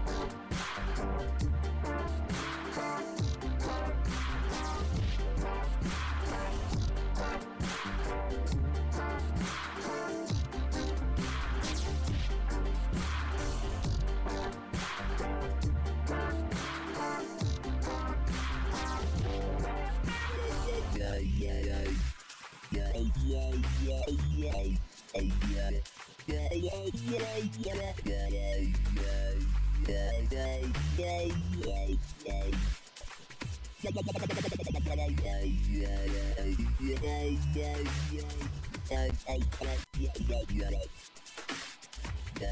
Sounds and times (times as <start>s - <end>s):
Dubstep: 0.0s - 42.5s.